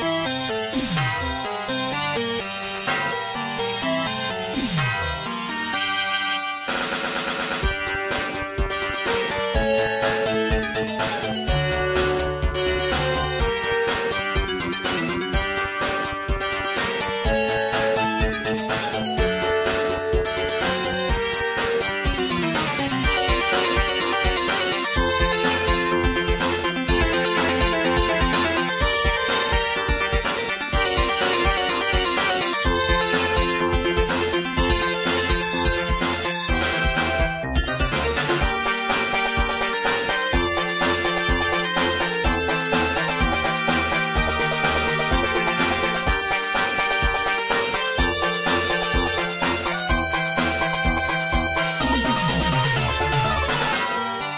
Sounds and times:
Soundtrack music: 0.0s - 54.3s.

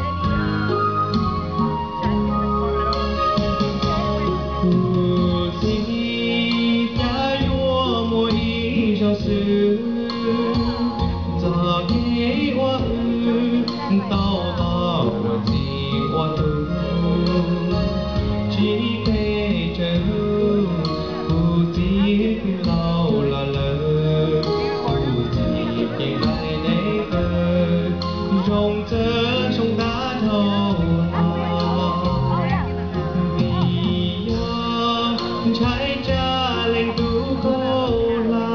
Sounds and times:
Music: 0.0s - 38.5s
Male singing: 4.0s - 38.5s
Speech: 11.5s - 16.5s, 24.4s - 38.5s.

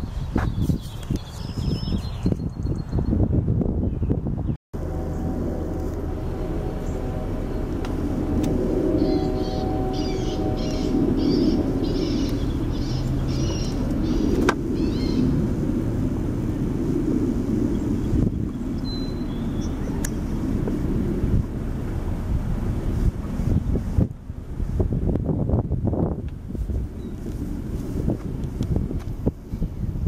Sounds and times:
Outside, rural or natural: 0.0s - 30.0s.

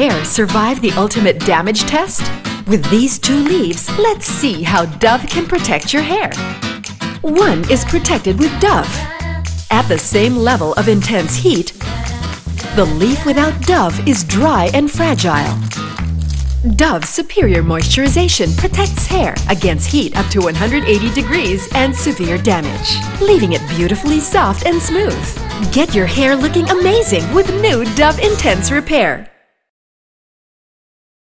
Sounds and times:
Speech: 0.0s - 6.4s, 7.2s - 9.0s, 9.7s - 11.8s, 12.7s - 15.6s, 16.7s - 29.3s
Music: 0.0s - 29.7s.

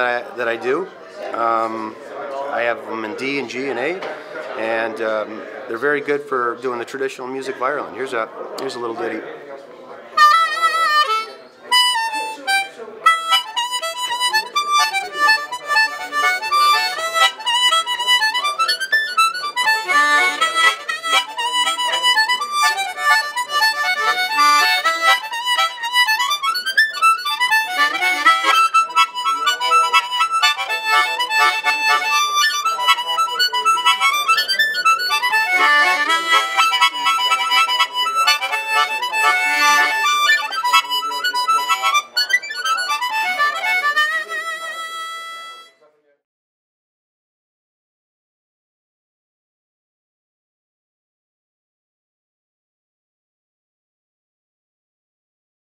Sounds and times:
Speech: 0.0s - 46.3s
Harmonica: 10.2s - 45.8s.

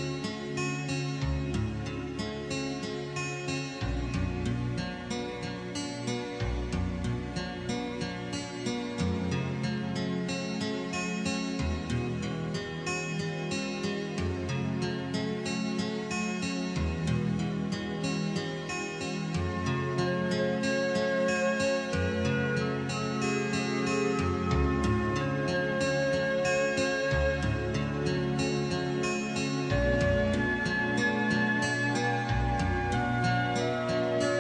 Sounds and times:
Music: 0.0s - 34.4s.

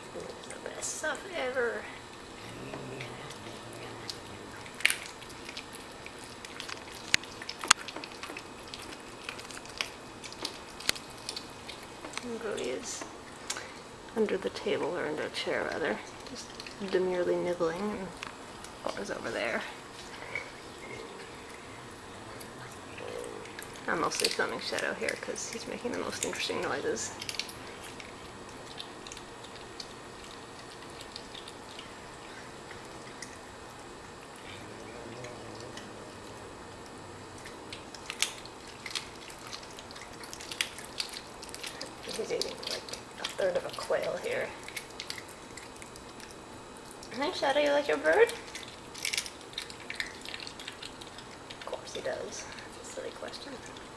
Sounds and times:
Speech: 14.2s - 16.0s, 16.8s - 18.2s, 22.4s - 27.2s, 34.5s - 36.4s, 42.1s - 44.6s, 47.1s - 48.4s, 51.7s - 53.7s.

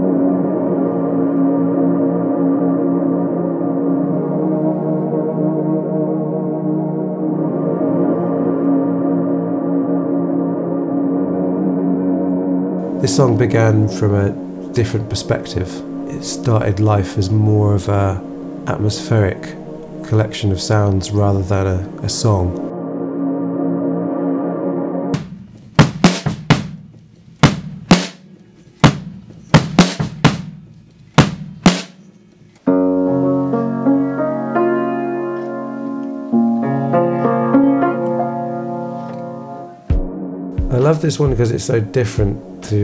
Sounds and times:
Classical music: 0.0s - 25.7s, 32.4s - 42.8s.

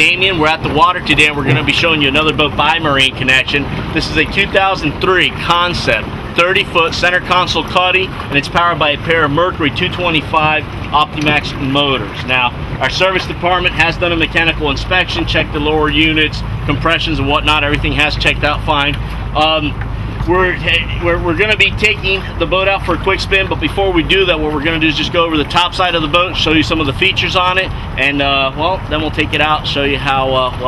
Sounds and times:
Boat, Water vehicle: 0.0s - 30.6s
Speech: 0.0s - 30.6s.

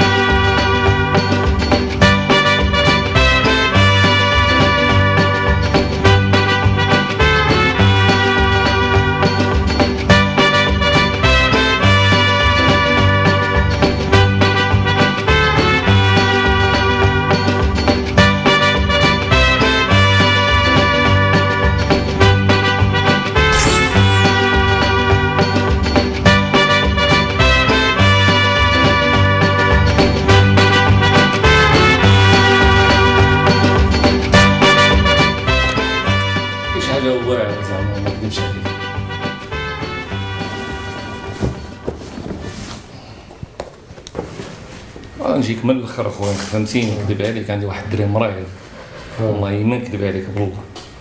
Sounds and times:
Music: 0.0s - 43.3s.

